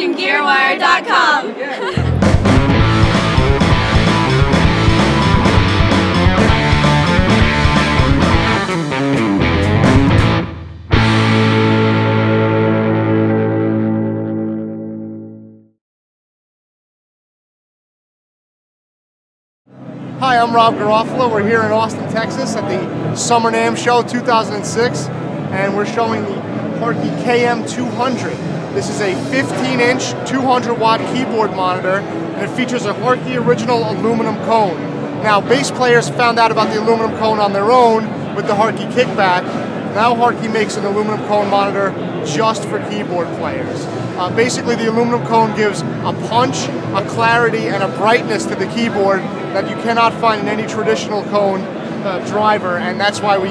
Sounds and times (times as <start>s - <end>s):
Music: 2.0s - 15.8s, 19.7s - 53.5s
Speech: 20.2s - 53.5s.